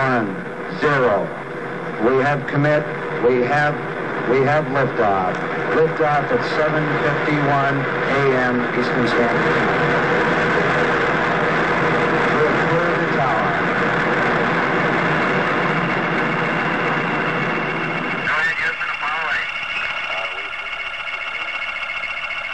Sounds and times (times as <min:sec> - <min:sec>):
Speech: 0:00.0 - 0:01.3, 0:02.0 - 0:09.5, 0:12.3 - 0:13.6, 0:18.2 - 0:20.5.